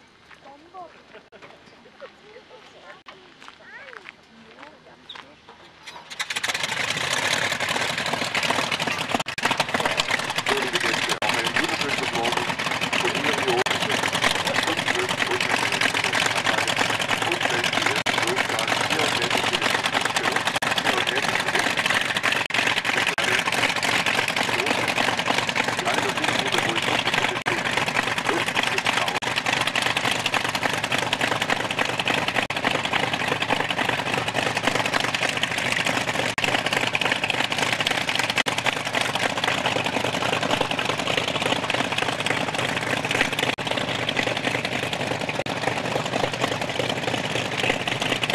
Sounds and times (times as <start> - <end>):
Vehicle: 0.0 - 48.3
Speech: 0.4 - 5.8, 9.8 - 21.7, 23.0 - 23.4, 24.5 - 24.8, 25.8 - 27.6, 28.3 - 29.2.